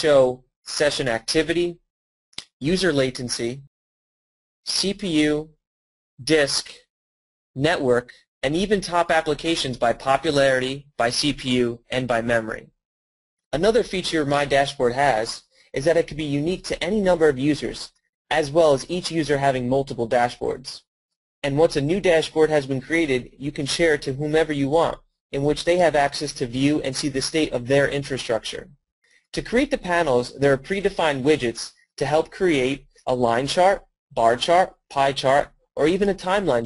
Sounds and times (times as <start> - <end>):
Speech: 0.0 - 3.7, 4.7 - 5.6, 6.2 - 6.9, 7.6 - 12.8, 13.5 - 36.6.